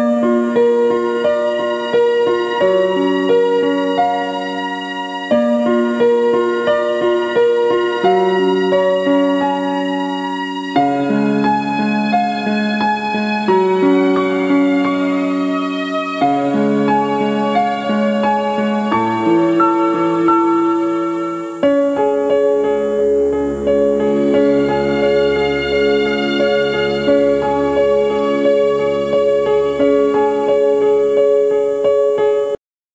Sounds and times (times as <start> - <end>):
Tender music: 0.0 - 31.8.